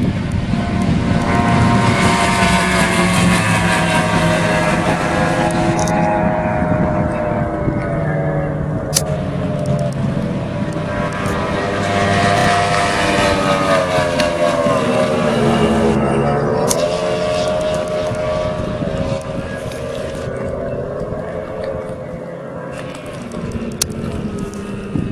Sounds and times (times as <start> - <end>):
Motorboat, speedboat: 0.0 - 25.1.